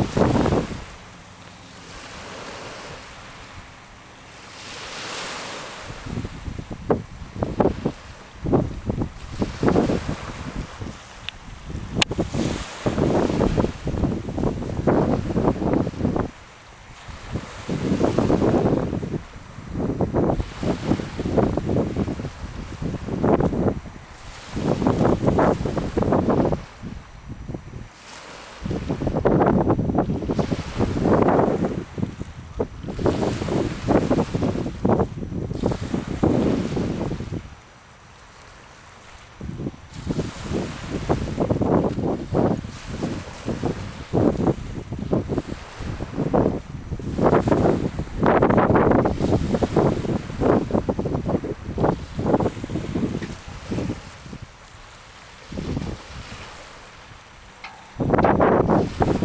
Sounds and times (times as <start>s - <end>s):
Sailboat, sailing ship: 0.0s - 59.2s.